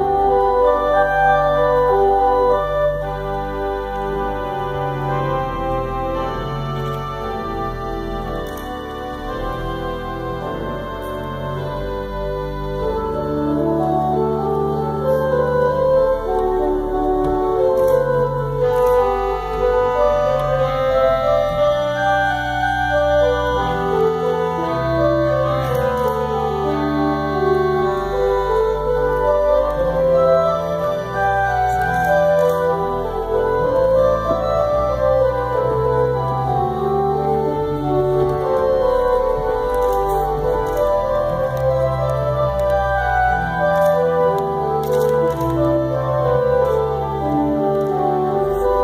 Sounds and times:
Hammond organ: 0.0s - 48.8s.

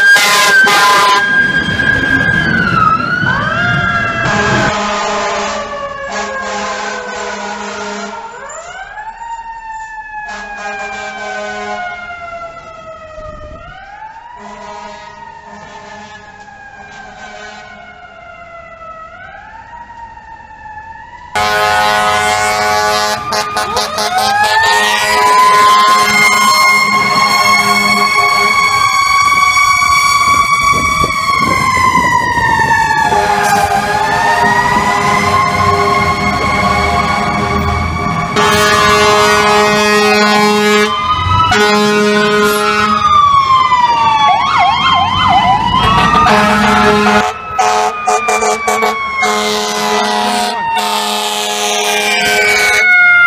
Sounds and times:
Air horn, truck horn: 0.2s - 1.2s, 4.2s - 8.3s, 10.3s - 11.9s, 14.4s - 16.2s, 17.0s - 17.8s, 21.4s - 28.7s, 33.1s - 37.6s, 38.4s - 43.0s, 46.1s - 53.0s.

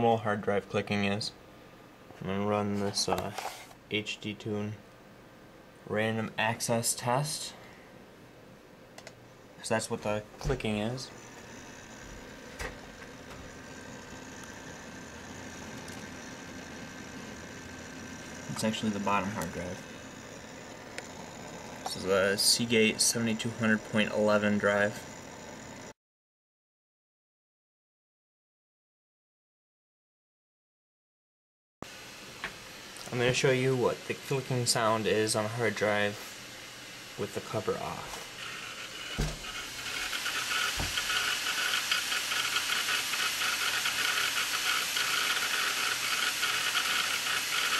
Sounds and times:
Speech: 0.0s - 1.4s, 2.2s - 4.8s, 5.9s - 7.6s, 9.6s - 11.2s, 18.5s - 19.8s, 21.9s - 25.0s, 33.0s - 36.2s, 37.2s - 38.2s.

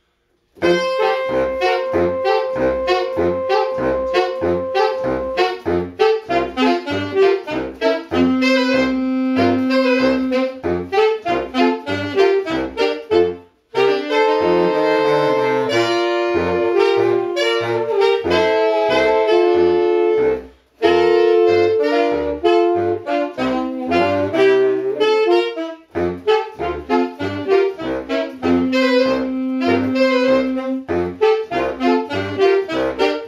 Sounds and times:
Saxophone: 0.0s - 33.2s.

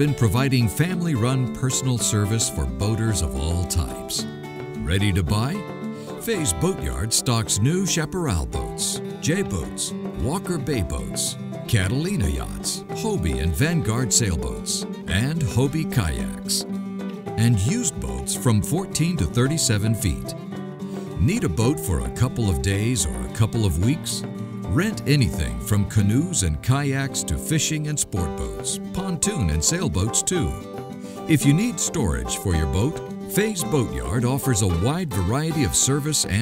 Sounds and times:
Speech: 0.0s - 4.2s, 4.8s - 5.6s, 6.2s - 16.6s, 17.4s - 20.4s, 21.2s - 30.6s, 31.3s - 36.4s
Music: 0.0s - 36.4s.

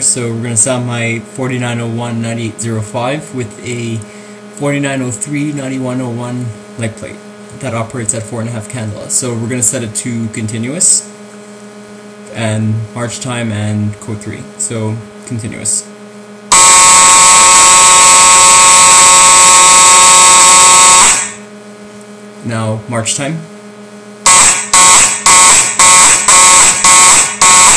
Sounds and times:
Speech: 0.0s - 11.2s, 12.3s - 16.0s, 22.4s - 23.5s
Buzzer: 16.5s - 21.5s, 24.2s - 27.7s.

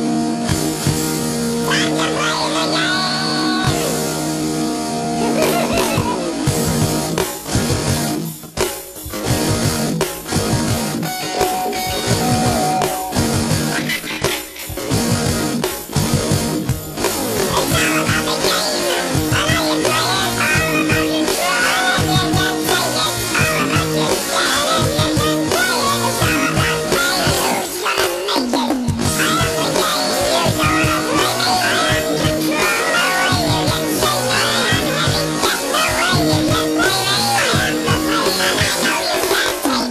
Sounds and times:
Music: 0.0s - 39.9s.

